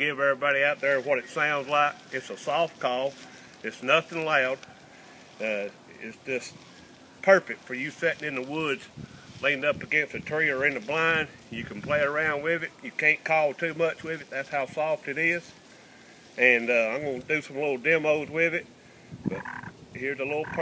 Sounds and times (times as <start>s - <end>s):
Speech: 0.0s - 4.6s, 5.4s - 6.6s, 7.2s - 15.5s, 16.4s - 18.7s, 19.3s - 20.6s.